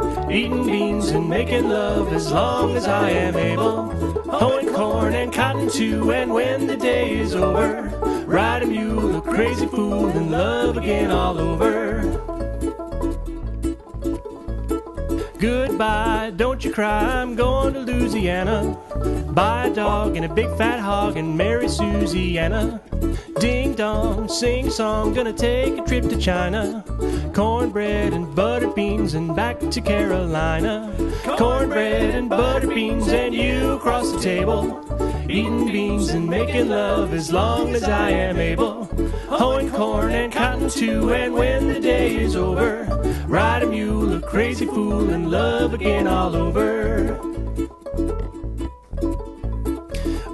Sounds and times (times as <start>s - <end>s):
Ukulele: 0.0s - 50.3s.